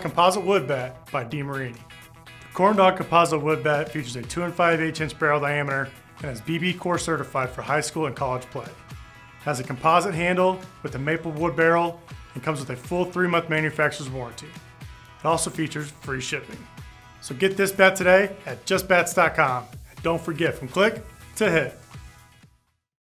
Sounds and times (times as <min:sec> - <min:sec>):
Speech: 0:00.0 - 0:01.8, 0:02.5 - 0:08.8, 0:09.4 - 0:14.6, 0:15.2 - 0:21.8
Music: 0:00.0 - 0:22.9.